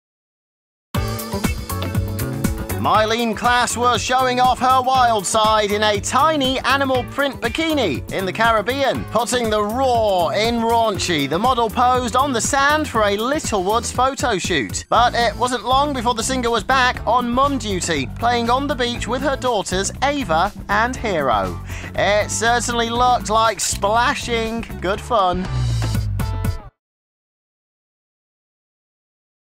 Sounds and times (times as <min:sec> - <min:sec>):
Music: 0:01.0 - 0:26.8
Speech: 0:02.8 - 0:25.5.